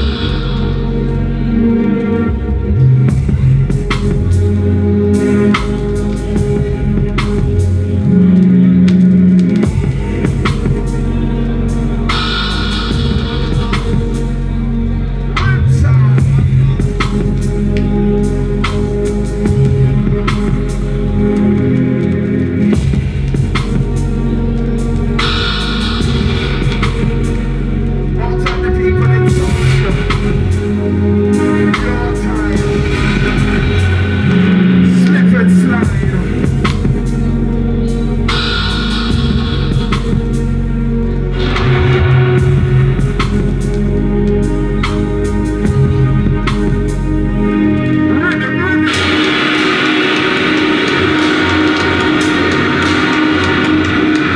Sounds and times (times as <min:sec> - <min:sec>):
Dubstep: 0:00.0 - 0:54.3.